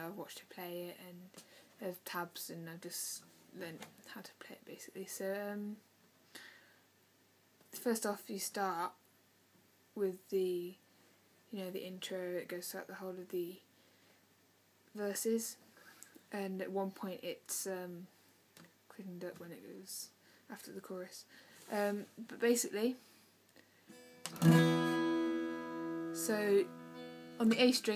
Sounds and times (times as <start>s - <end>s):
Speech: 0.0s - 5.8s, 7.7s - 9.0s, 10.0s - 10.8s, 11.5s - 13.7s, 14.9s - 15.6s, 16.3s - 18.1s, 18.9s - 23.0s, 26.2s - 26.7s, 27.4s - 27.9s
Strum: 23.9s - 27.9s.